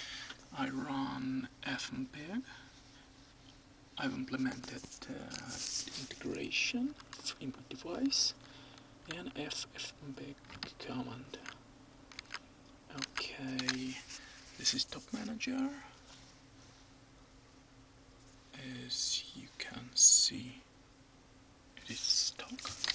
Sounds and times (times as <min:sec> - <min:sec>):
Speech: 0:00.5 - 0:02.6, 0:04.0 - 0:08.4, 0:09.1 - 0:11.6, 0:12.9 - 0:16.0, 0:18.5 - 0:20.7, 0:21.8 - 0:22.8.